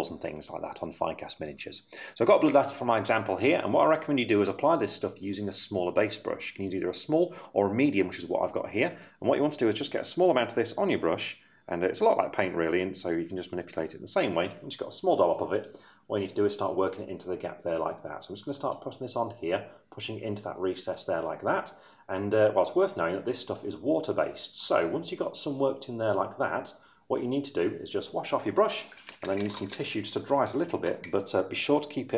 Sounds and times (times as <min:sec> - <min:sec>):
Speech: 0:00.0 - 0:32.1.